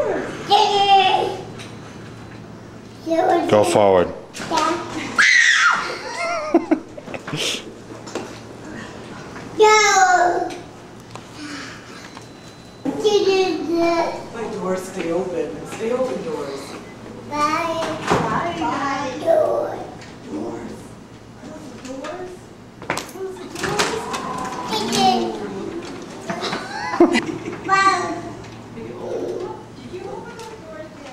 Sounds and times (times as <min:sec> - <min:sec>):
Child speech, kid speaking: 0:00.0 - 0:01.5, 0:03.0 - 0:05.2, 0:09.6 - 0:10.7, 0:12.9 - 0:14.5, 0:16.1 - 0:20.8, 0:21.4 - 0:22.5, 0:23.1 - 0:25.9, 0:27.7 - 0:31.1
Sliding door: 0:23.4 - 0:27.7.